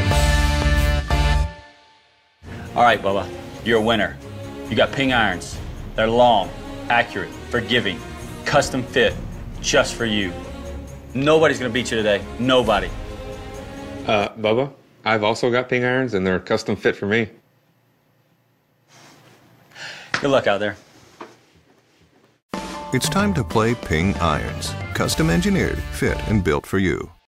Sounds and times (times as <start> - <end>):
Music: 0.0 - 14.4, 22.5 - 27.3
Speech: 2.8 - 10.4, 11.2 - 12.9, 14.1 - 17.4, 20.2 - 20.8, 23.0 - 27.3.